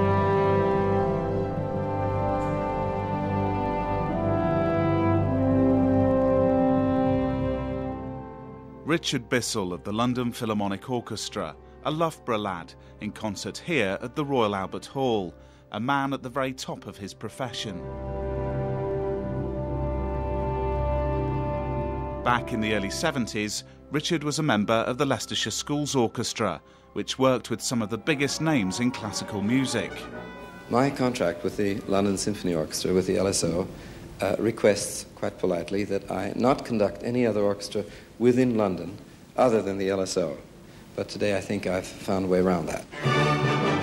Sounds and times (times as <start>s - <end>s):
Theme music: 0.0s - 14.8s, 16.0s - 33.3s, 42.9s - 43.8s
Speech: 8.9s - 17.8s, 22.3s - 40.4s, 41.0s - 42.9s.